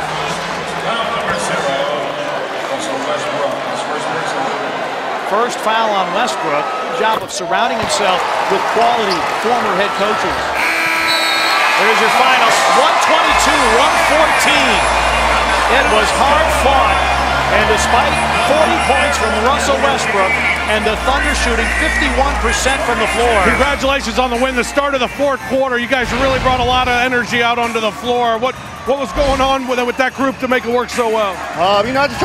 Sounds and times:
Speech: 5.3 - 10.4, 11.8 - 14.8, 15.7 - 32.2.

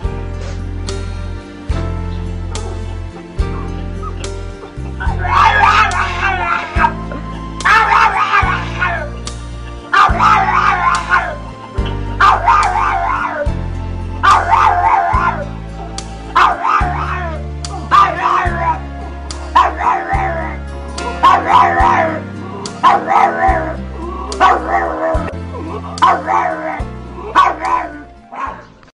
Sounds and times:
Music: 0.0 - 28.9
Bow-wow: 5.0 - 7.0, 7.6 - 9.1, 9.9 - 11.4, 12.2 - 13.5, 14.2 - 15.5, 16.4 - 18.8, 19.5 - 22.2, 22.8 - 23.8, 24.4 - 25.3, 26.0 - 28.7
Yip: 5.0 - 7.0, 7.6 - 9.0, 9.9 - 11.4, 12.2 - 13.5, 14.2 - 15.4, 16.4 - 17.3, 17.9 - 18.8, 19.6 - 20.4, 21.2 - 22.2, 22.8 - 23.7, 24.4 - 25.2, 26.0 - 26.8, 27.4 - 28.7.

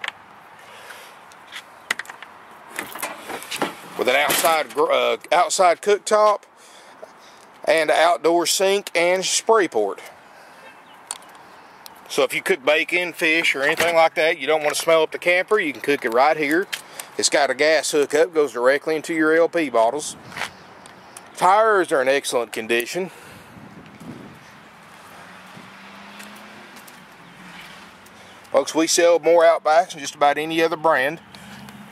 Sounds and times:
Outside, urban or manmade: 0.0 - 31.9
Vehicle: 0.0 - 31.9
Speech: 4.0 - 6.5, 7.6 - 10.1, 12.1 - 20.2, 21.4 - 23.1, 28.5 - 31.2.

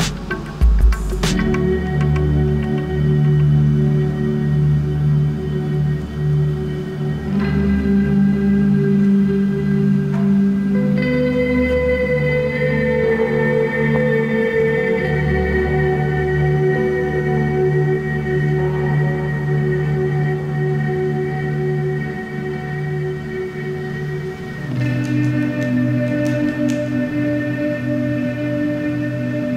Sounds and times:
Music: 0.0 - 29.5.

